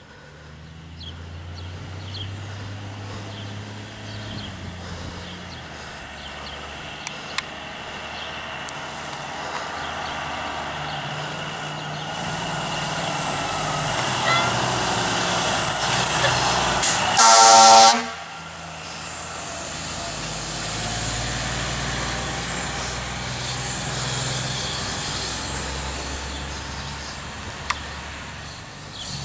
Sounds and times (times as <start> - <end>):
Outside, urban or manmade: 0.0 - 29.2
Truck: 0.0 - 29.2.